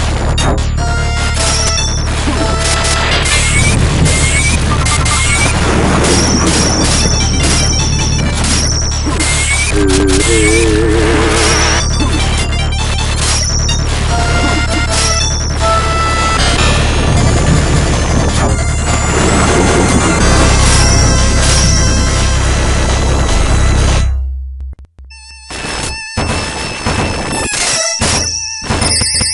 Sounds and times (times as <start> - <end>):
Music: 0.0 - 29.3.